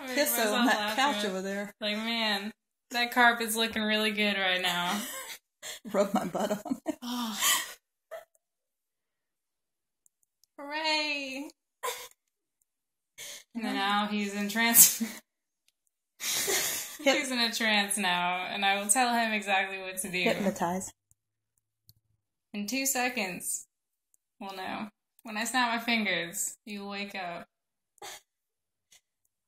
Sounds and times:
Speech: 0:00.0 - 0:03.1, 0:10.6 - 0:11.5, 0:17.0 - 0:20.9.

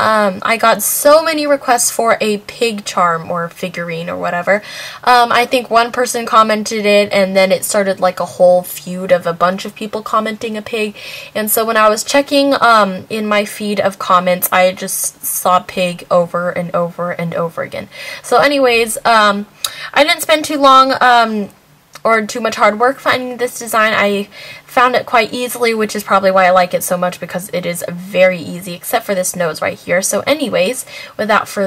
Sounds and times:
Speech: 0:00.0 - 0:31.6.

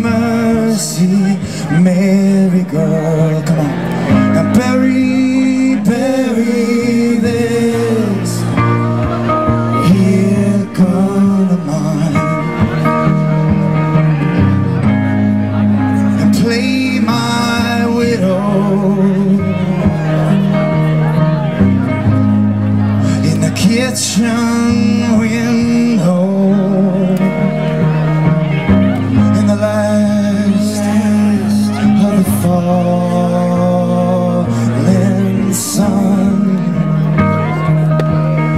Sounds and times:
Music: 0:00.0 - 0:38.5.

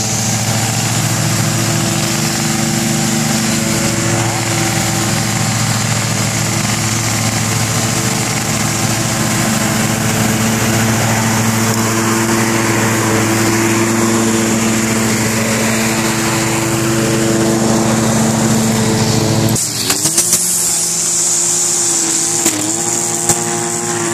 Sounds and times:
Lawn mower: 0:00.0 - 0:24.1.

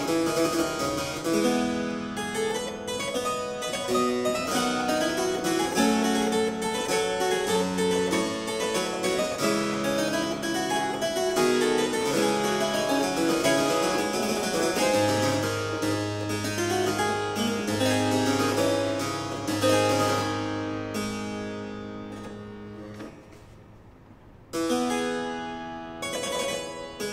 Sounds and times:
Harpsichord: 0:00.0 - 0:23.4, 0:24.4 - 0:27.1
Piano: 0:00.0 - 0:27.1.

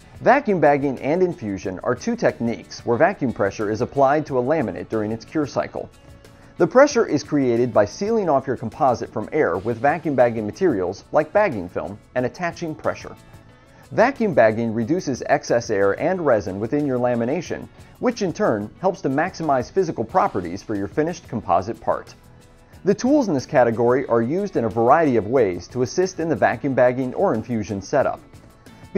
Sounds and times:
Music: 0:00.0 - 0:28.9
Speech: 0:00.2 - 0:05.9, 0:06.6 - 0:13.2, 0:13.9 - 0:22.2, 0:22.8 - 0:28.3.

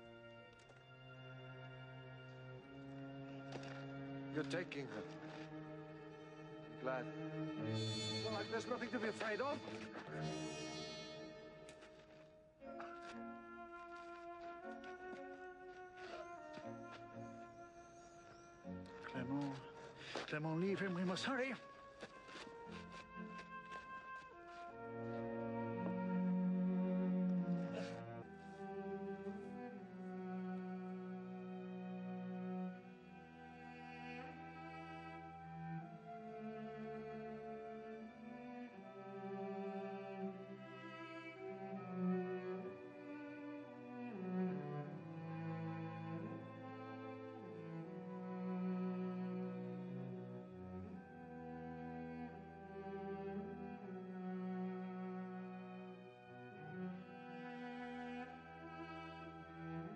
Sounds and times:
Cello: 0:00.0 - 0:59.9.

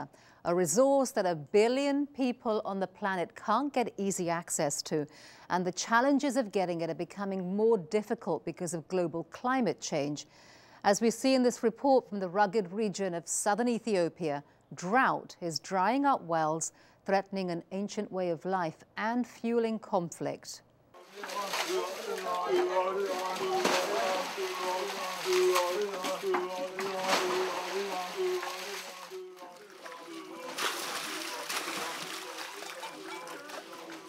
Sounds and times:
Speech: 0:00.0 - 0:10.3, 0:10.9 - 0:28.5
Gurgling: 0:21.0 - 0:34.0.

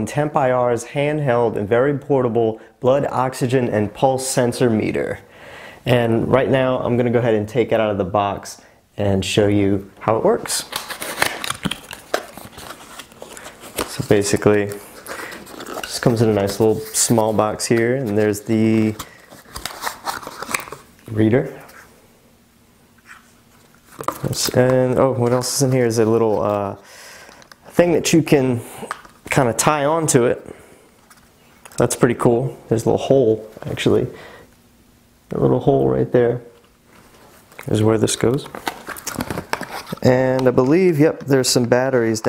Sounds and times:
Speech: 0:00.0 - 0:05.3, 0:05.9 - 0:10.8, 0:13.9 - 0:14.8, 0:15.9 - 0:19.0, 0:21.1 - 0:21.8, 0:24.2 - 0:26.8, 0:27.7 - 0:30.6, 0:31.8 - 0:34.2, 0:35.3 - 0:36.6, 0:37.6 - 0:38.6, 0:40.0 - 0:42.2.

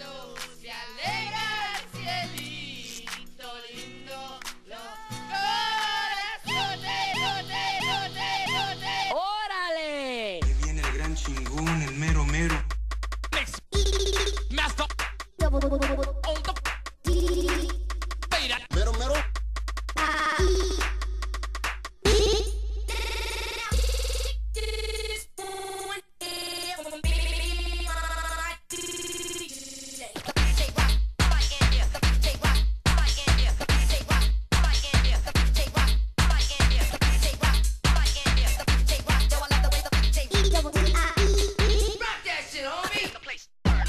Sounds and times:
Music: 0:00.0 - 0:09.2, 0:10.4 - 0:24.4, 0:25.8 - 0:28.7, 0:30.0 - 0:42.0, 0:43.6 - 0:43.8.

